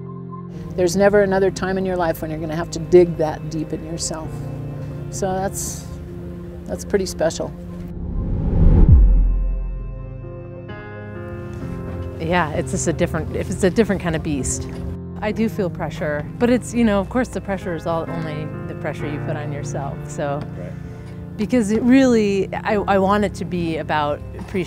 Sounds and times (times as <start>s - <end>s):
Music: 0.0s - 24.6s
Outside, rural or natural: 0.2s - 18.0s.